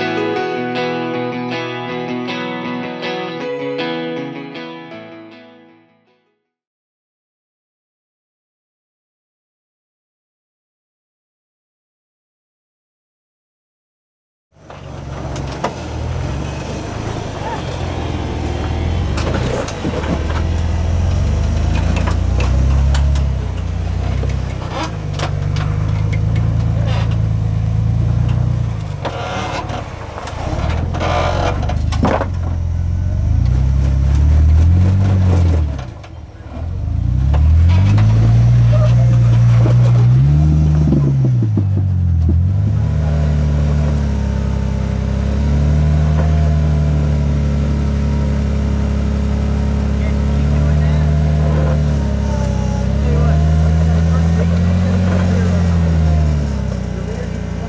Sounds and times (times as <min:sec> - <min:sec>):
Car: 0:14.5 - 0:57.6
Accelerating, revving, vroom: 0:15.2 - 0:32.3, 0:33.2 - 0:35.9, 0:36.6 - 0:57.6.